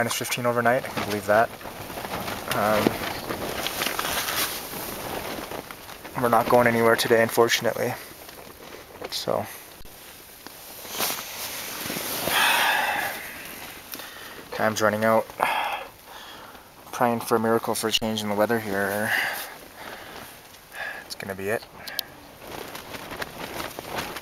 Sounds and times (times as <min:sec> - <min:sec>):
Speech: 0:00.0 - 0:01.5, 0:02.5 - 0:03.0, 0:06.2 - 0:08.1, 0:09.1 - 0:09.6, 0:14.6 - 0:15.3, 0:16.9 - 0:19.3, 0:21.1 - 0:21.7.